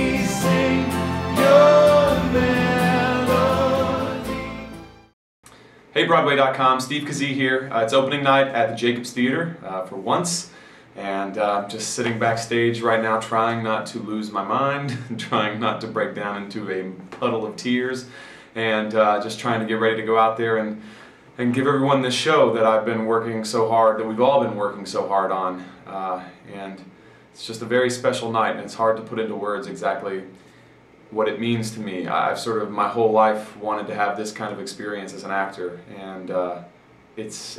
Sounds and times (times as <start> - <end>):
Speech: 5.9 - 30.4, 31.1 - 37.5.